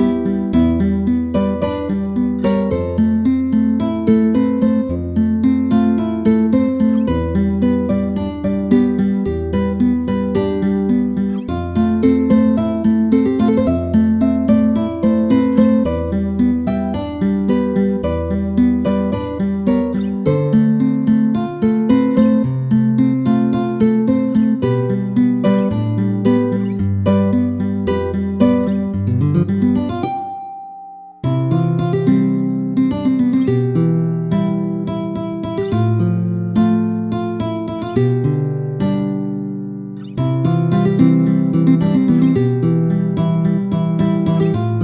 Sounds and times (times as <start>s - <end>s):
Music: 0.0s - 44.8s.